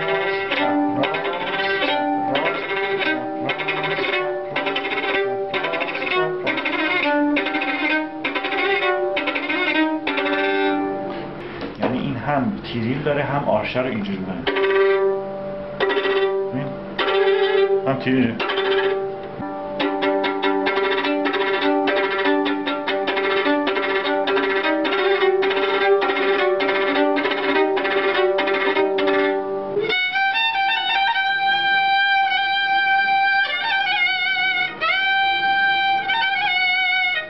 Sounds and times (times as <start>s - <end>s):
Violin, fiddle: 0.0s - 11.9s, 13.8s - 37.3s
Speech: 11.8s - 14.5s, 16.6s - 16.8s, 17.9s - 18.5s.